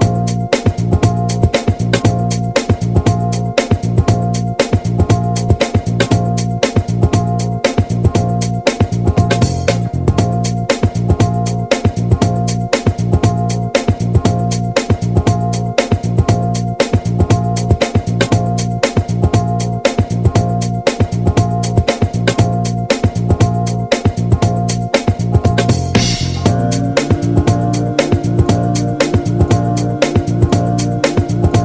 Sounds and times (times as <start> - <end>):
Music: 0.0 - 31.6.